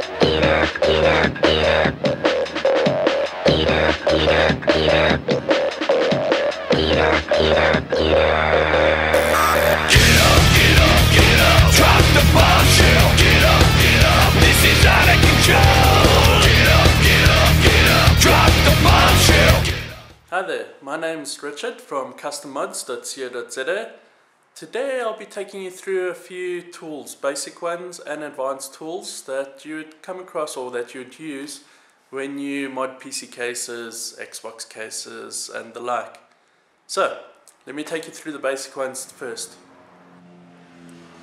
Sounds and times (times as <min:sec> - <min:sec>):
Speech: 0:20.3 - 0:24.0, 0:24.6 - 0:36.2, 0:36.9 - 0:39.6.